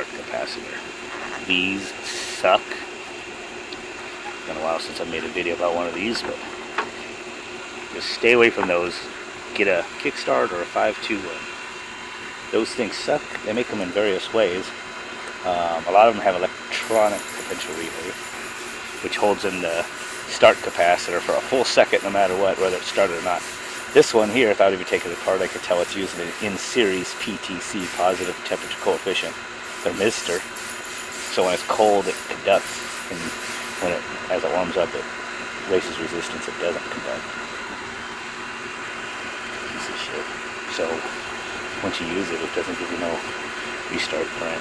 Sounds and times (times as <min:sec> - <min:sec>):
Speech: 0:00.0 - 0:02.9, 0:04.4 - 0:06.5, 0:08.0 - 0:11.5, 0:12.5 - 0:14.7, 0:15.4 - 0:18.1, 0:19.0 - 0:30.4, 0:31.3 - 0:37.2, 0:39.7 - 0:41.2, 0:41.8 - 0:43.3, 0:43.9 - 0:44.6.